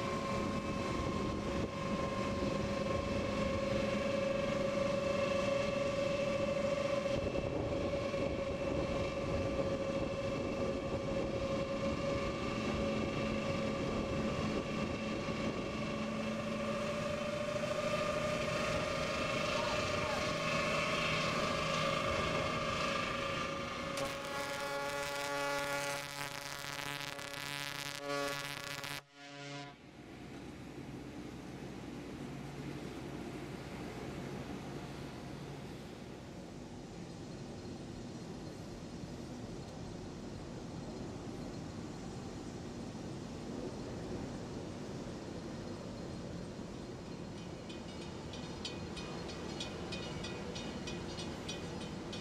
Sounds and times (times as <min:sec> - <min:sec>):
Ship: 0:00.0 - 0:52.2.